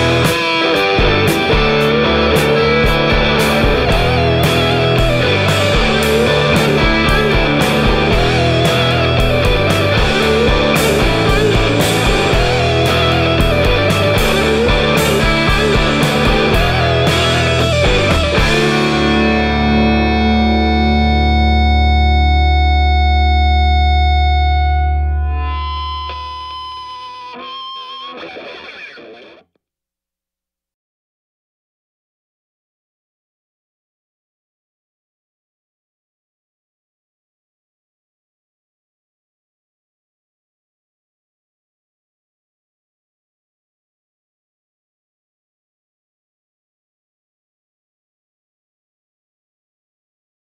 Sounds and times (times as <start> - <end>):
Distortion: 0.0 - 29.6
Effects unit: 0.0 - 29.6
Music: 0.0 - 29.6.